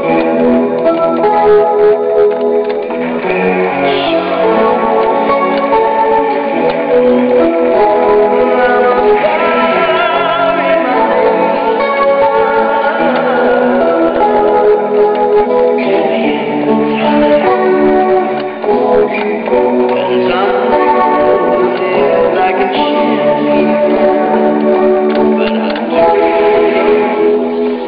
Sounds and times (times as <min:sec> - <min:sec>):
Music: 0:00.0 - 0:27.8.